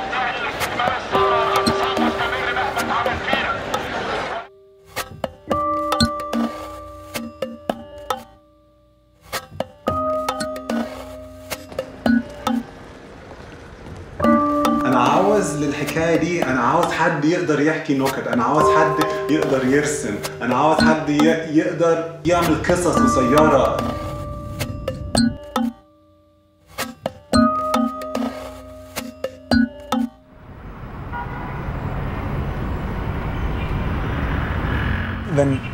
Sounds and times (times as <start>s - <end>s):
Music: 0.1s - 12.7s, 14.2s - 30.3s
Vehicle: 11.7s - 14.3s, 30.3s - 35.7s.